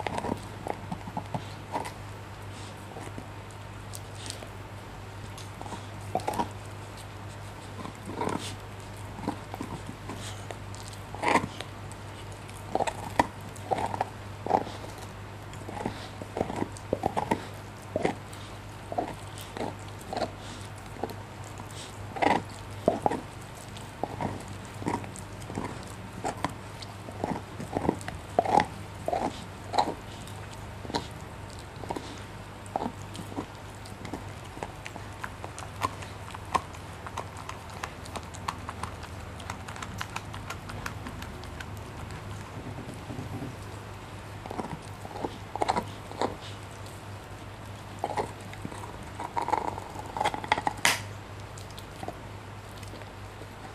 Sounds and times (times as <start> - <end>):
Chewing, mastication: 0.0 - 53.7
Dog: 0.0 - 53.7.